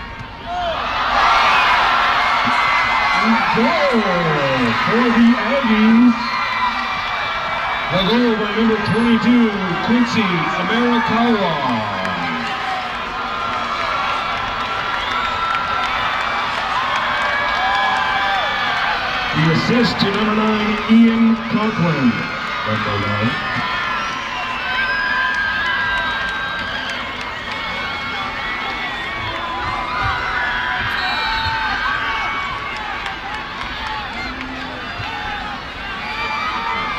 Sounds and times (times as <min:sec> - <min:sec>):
Speech: 0:03.2 - 0:06.2, 0:07.9 - 0:12.5, 0:19.4 - 0:23.4.